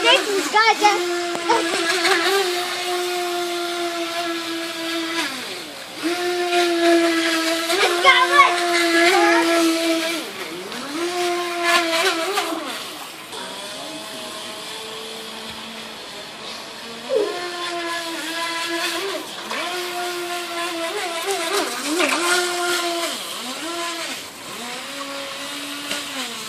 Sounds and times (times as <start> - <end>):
Speech: 0.0 - 1.7, 7.8 - 9.6
Motorboat, speedboat: 6.1 - 7.5, 8.8 - 12.7.